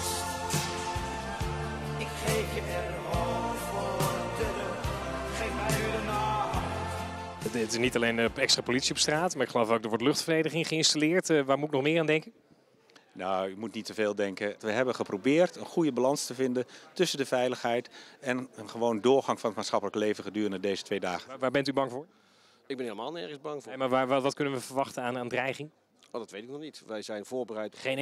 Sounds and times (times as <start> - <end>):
Speech: 7.4 - 12.4, 22.7 - 28.0.